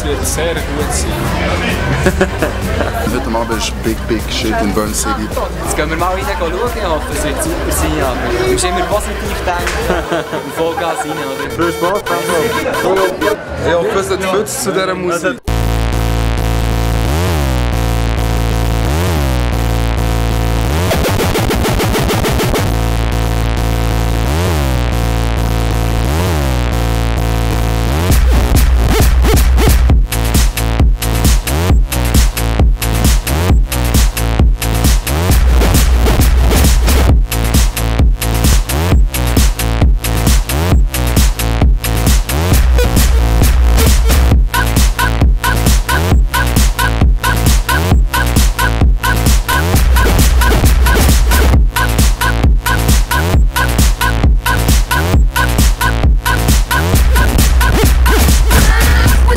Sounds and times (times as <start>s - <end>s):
Music: 0.0s - 13.4s, 15.4s - 59.3s.